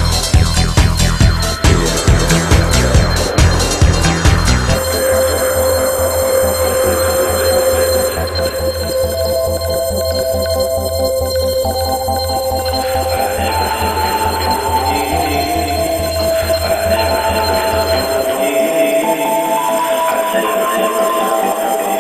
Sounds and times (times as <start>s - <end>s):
Hum: 0.0s - 20.2s.